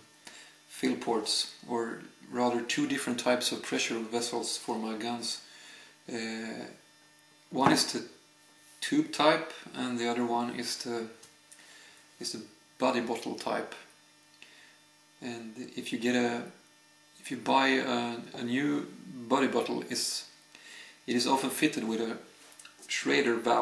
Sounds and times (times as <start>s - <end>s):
Speech: 0.8s - 5.5s, 6.1s - 6.8s, 7.6s - 8.1s, 8.8s - 11.2s, 12.2s - 13.9s, 15.2s - 16.6s, 17.2s - 20.4s, 21.1s - 23.6s.